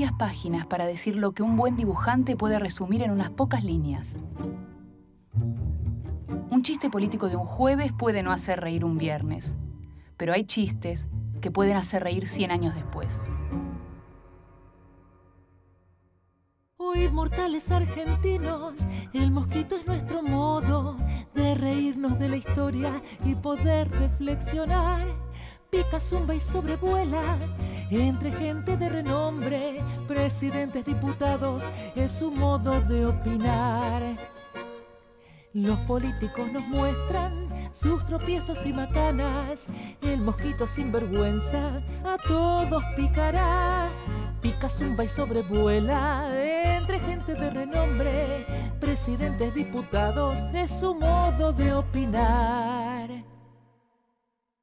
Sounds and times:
Speech: 0:00.0 - 0:04.2, 0:06.5 - 0:09.6, 0:10.2 - 0:13.3
Music: 0:00.0 - 0:54.2.

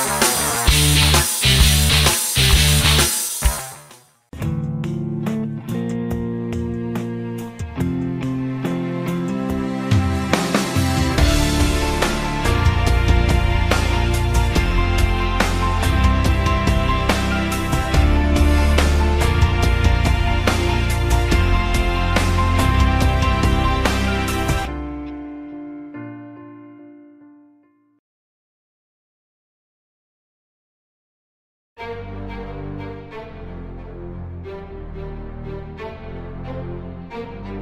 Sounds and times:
Music: 0:00.0 - 0:28.0, 0:31.8 - 0:37.6.

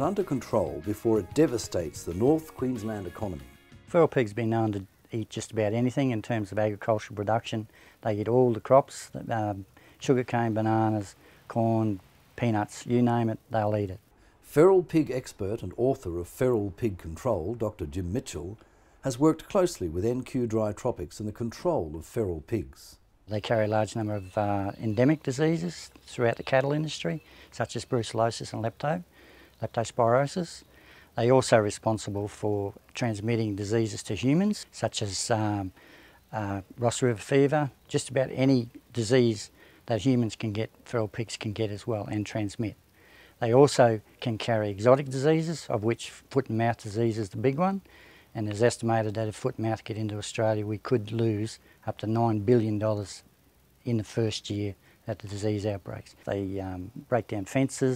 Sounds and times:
Music: 0:00.0 - 0:04.2
Speech: 0:00.0 - 0:42.8, 0:43.4 - 0:57.9.

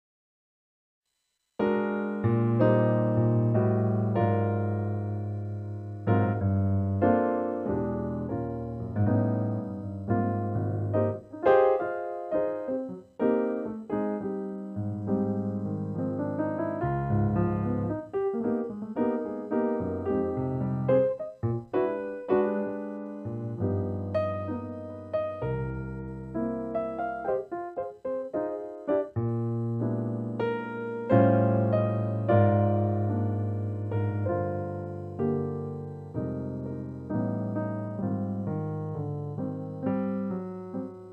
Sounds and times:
Music: 0:01.6 - 0:41.1.

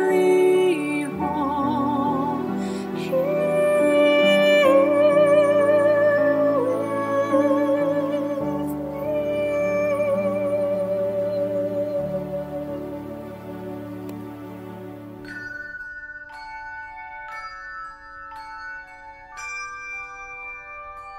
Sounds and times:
Marimba, xylophone: 0:00.0 - 0:14.6, 0:15.2 - 0:21.1
Glockenspiel: 0:00.0 - 0:21.1.

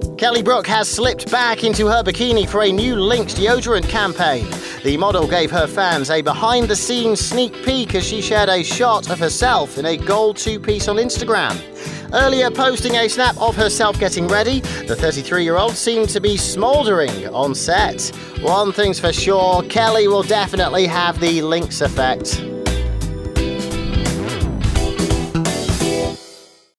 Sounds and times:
Music: 0:00.0 - 0:26.7
Speech: 0:00.2 - 0:22.4.

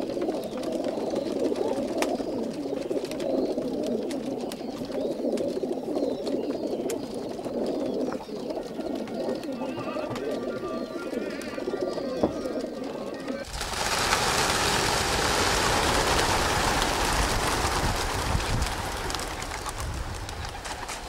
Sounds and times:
Pigeon, dove: 0:00.0 - 0:21.0.

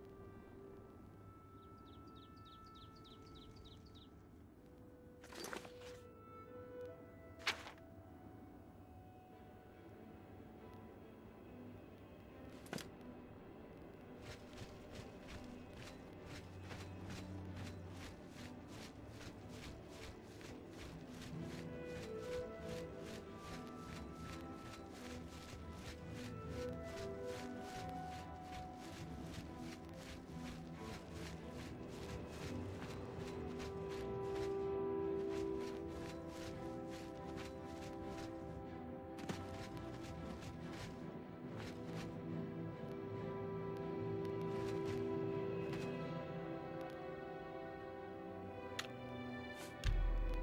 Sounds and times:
Music: 0:00.0 - 0:50.4.

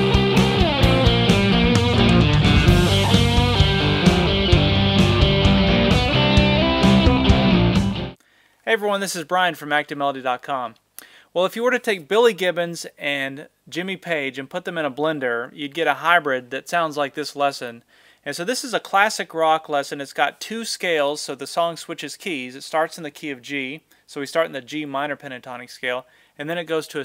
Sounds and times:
Electric guitar: 0:00.0 - 0:08.2
Strum: 0:00.0 - 0:08.2
Speech: 0:08.6 - 0:10.8, 0:11.4 - 0:27.0.

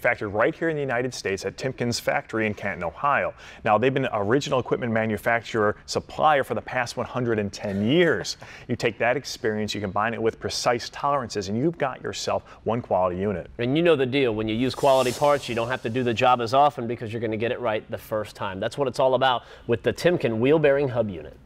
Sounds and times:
Speech: 0:00.0 - 0:21.4.

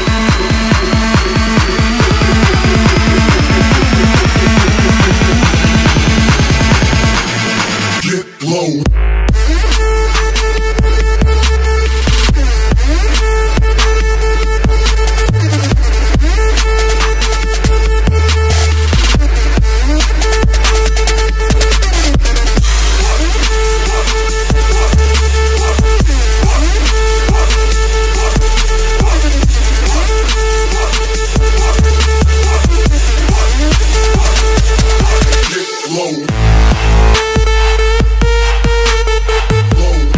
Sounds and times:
Techno: 0:00.0 - 0:40.1.

